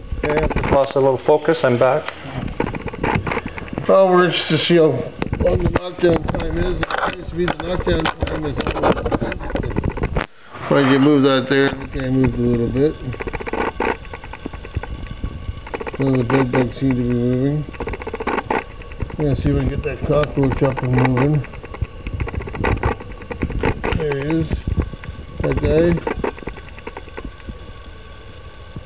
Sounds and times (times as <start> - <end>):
Speech: 0.2 - 2.1, 10.7 - 13.2, 16.0 - 17.7, 19.2 - 21.4, 25.4 - 26.1.